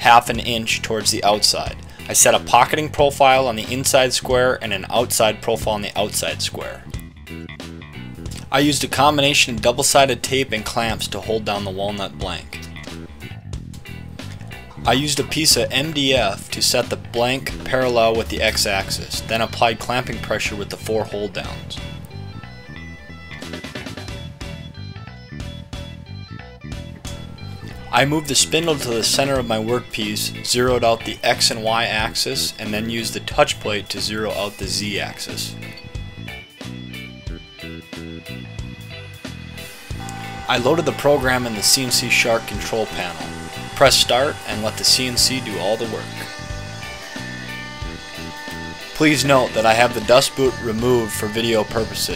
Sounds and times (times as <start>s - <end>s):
Speech: 0.0s - 6.9s, 8.4s - 12.7s, 14.8s - 21.9s, 27.9s - 35.6s, 40.5s - 46.3s, 49.0s - 52.1s
Music: 0.0s - 52.1s.